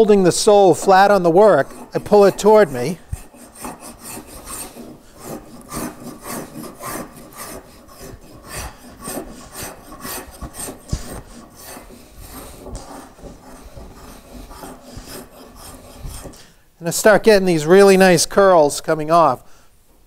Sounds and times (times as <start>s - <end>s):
Filing (rasp): 0.5s - 16.5s
Wood: 0.8s - 16.5s
Rub: 0.9s - 16.4s.